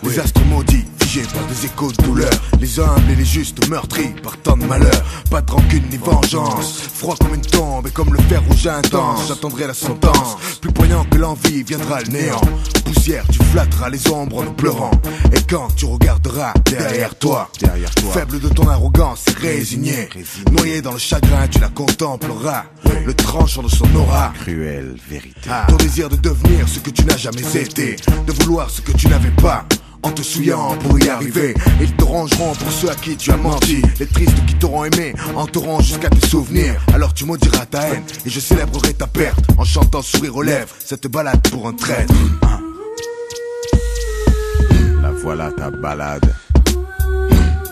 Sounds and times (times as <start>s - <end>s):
Rapping: 0.0s - 43.1s, 43.7s - 47.7s
Hip hop music: 0.0s - 47.7s.